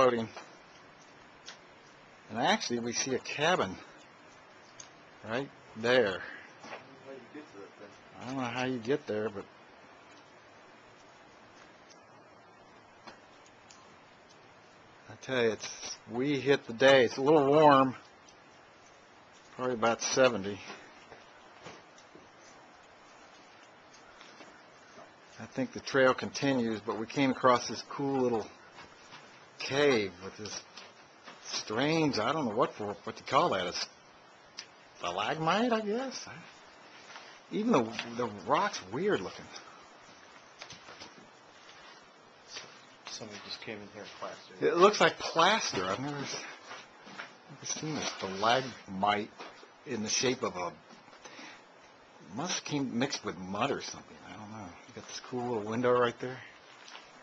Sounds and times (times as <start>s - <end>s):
Speech: 0.0s - 0.4s, 2.3s - 3.9s, 5.2s - 9.5s, 15.1s - 18.0s, 19.6s - 20.8s, 25.4s - 28.6s, 29.6s - 30.7s, 31.4s - 33.9s, 35.0s - 36.6s, 37.5s - 39.6s, 42.5s - 46.6s, 47.5s - 50.8s, 52.3s - 56.6s.